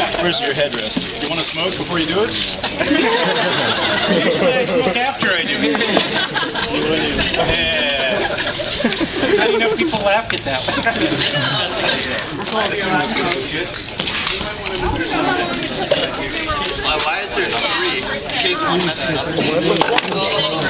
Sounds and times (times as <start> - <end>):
Laughter: 2.6 - 10.0, 10.6 - 12.2.